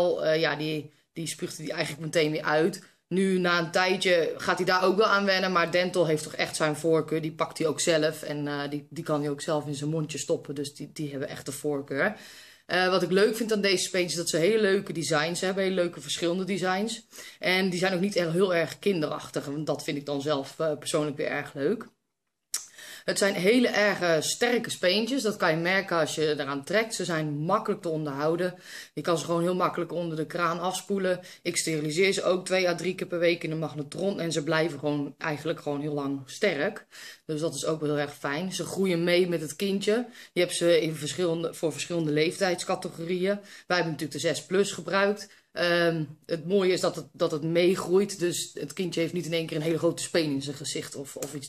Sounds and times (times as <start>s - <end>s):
Speech: 0.0s - 22.0s, 22.6s - 51.4s.